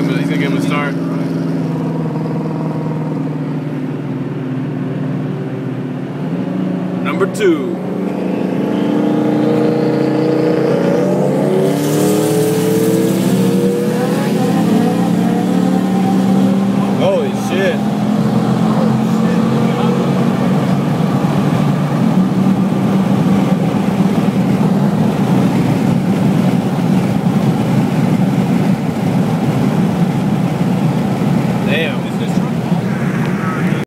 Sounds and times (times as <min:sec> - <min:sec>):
Speech: 0:07.0 - 0:07.8, 0:16.8 - 0:17.8, 0:31.6 - 0:33.8.